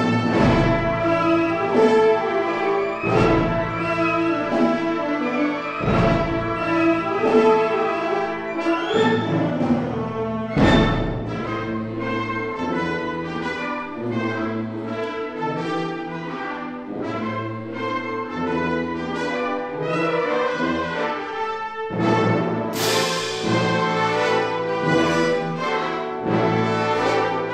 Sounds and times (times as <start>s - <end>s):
Music: 0.0s - 27.5s.